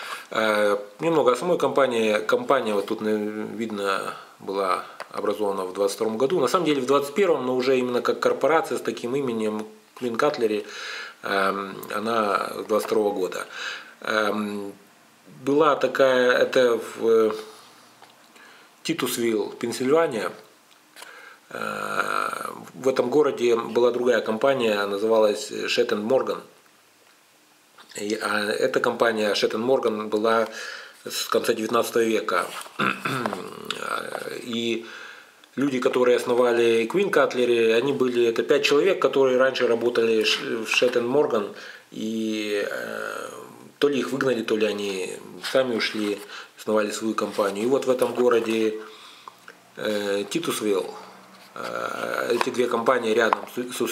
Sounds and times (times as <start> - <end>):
Speech: 0.3 - 17.6, 18.8 - 20.5, 21.5 - 26.6, 27.9 - 34.9, 35.5 - 48.9, 49.8 - 53.9.